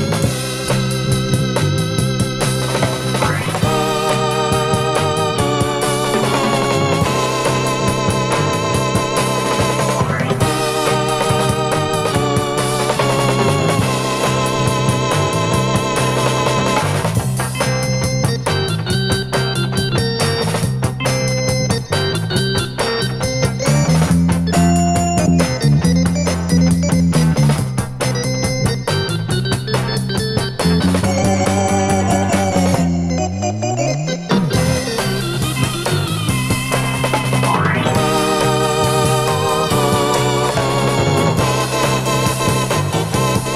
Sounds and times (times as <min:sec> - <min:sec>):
Music: 0:00.0 - 0:43.5.